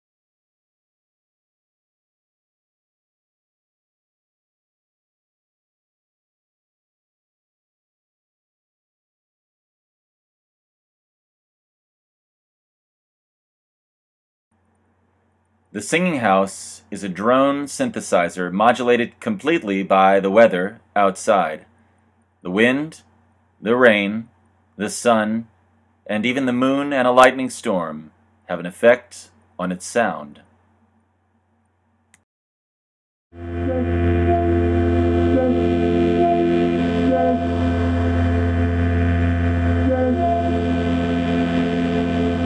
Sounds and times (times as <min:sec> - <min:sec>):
Speech: 0:15.8 - 0:21.7, 0:22.5 - 0:23.0, 0:23.6 - 0:25.5, 0:26.1 - 0:30.4.